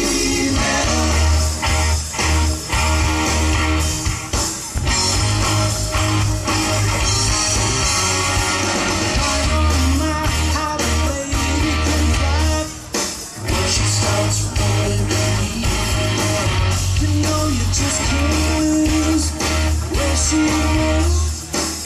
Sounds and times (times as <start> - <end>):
Music: 0.0 - 21.8.